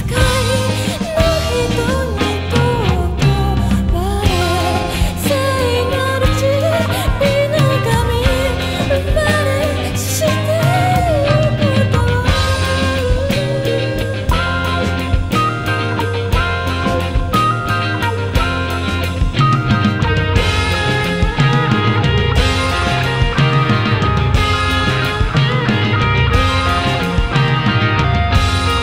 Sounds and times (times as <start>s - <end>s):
Psychedelic rock: 0.0s - 28.8s.